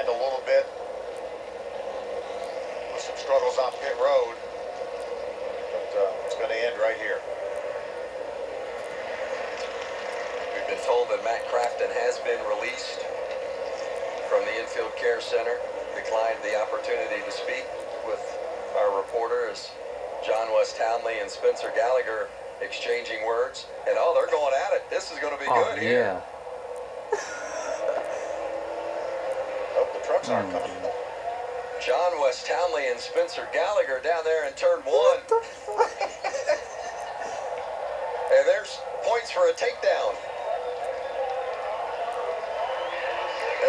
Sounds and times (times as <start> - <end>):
Speech: 0.0 - 0.7, 3.0 - 4.4, 14.3 - 26.2, 30.0 - 30.9, 31.8 - 35.4, 38.3 - 40.2.